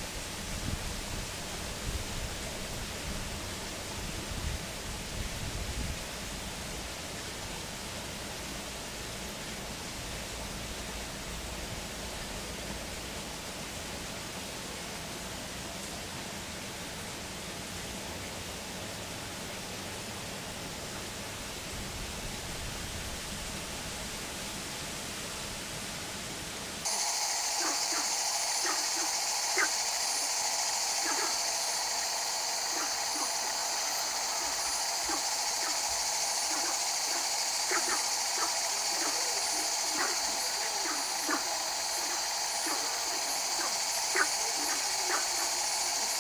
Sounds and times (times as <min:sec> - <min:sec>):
Insect: 0:00.0 - 0:46.2.